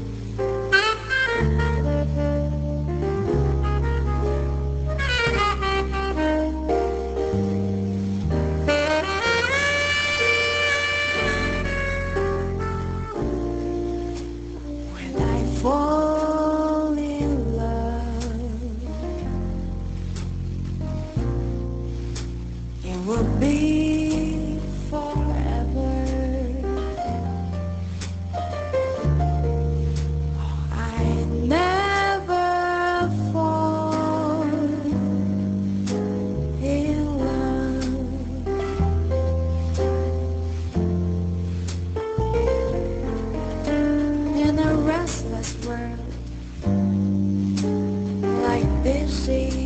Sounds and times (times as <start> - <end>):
Jazz: 0.0 - 49.6.